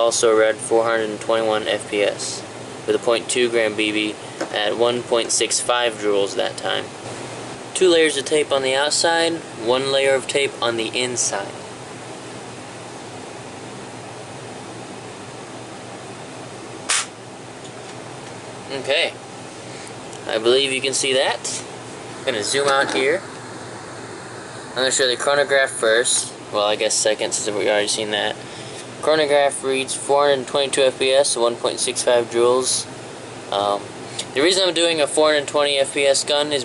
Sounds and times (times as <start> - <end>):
Speech: 0.0 - 6.9, 7.8 - 11.6, 18.7 - 19.2, 20.2 - 23.3, 24.8 - 28.4, 29.0 - 32.9, 33.5 - 36.6
Mechanical fan: 0.0 - 36.6.